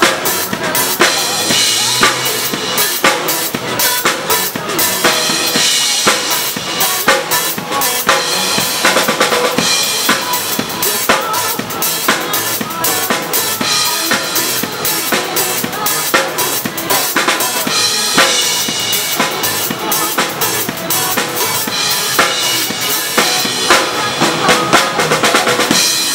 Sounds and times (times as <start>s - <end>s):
Drum kit: 0.0s - 26.1s
Drum roll: 0.0s - 26.1s.